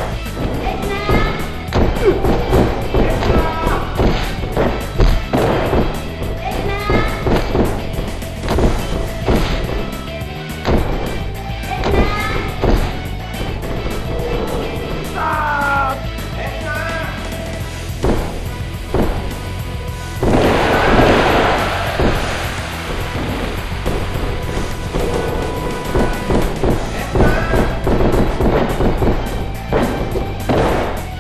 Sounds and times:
Music: 0.0 - 31.2
Speech: 15.2 - 17.2.

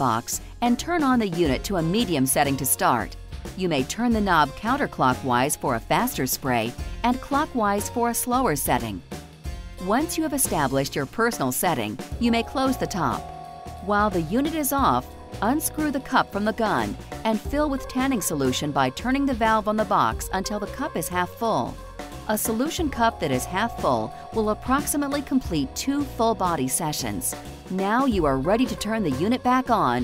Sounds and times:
Speech: 0.0 - 9.0, 9.8 - 13.2, 13.8 - 30.0
Music: 0.0 - 30.0.

